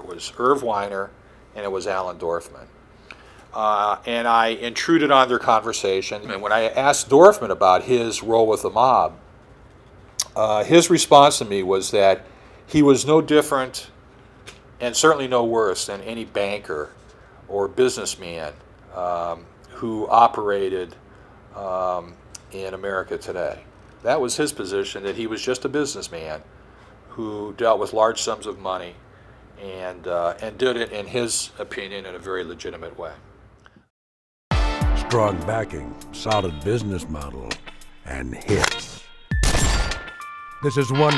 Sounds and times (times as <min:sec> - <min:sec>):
Speech: 0:00.0 - 0:02.7, 0:03.5 - 0:09.2, 0:10.2 - 0:14.0, 0:14.8 - 0:21.0, 0:21.6 - 0:26.5, 0:27.1 - 0:29.0, 0:29.6 - 0:33.2, 0:35.0 - 0:39.0, 0:40.6 - 0:41.1.